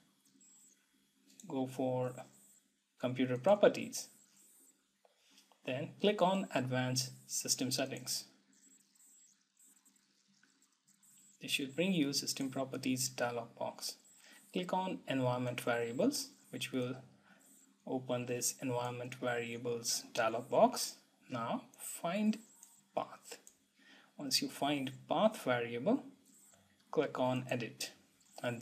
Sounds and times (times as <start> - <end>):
Inside, small room: 0.0 - 28.6
Speech: 1.5 - 2.2, 3.0 - 4.1, 5.7 - 8.3, 11.4 - 17.0, 17.9 - 22.4, 23.0 - 23.4, 24.2 - 26.1, 27.0 - 28.6.